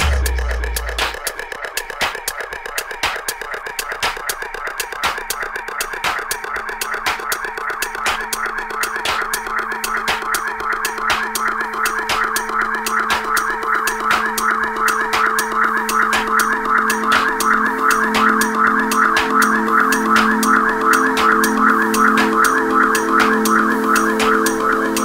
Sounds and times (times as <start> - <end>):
Music: 0.0 - 25.0.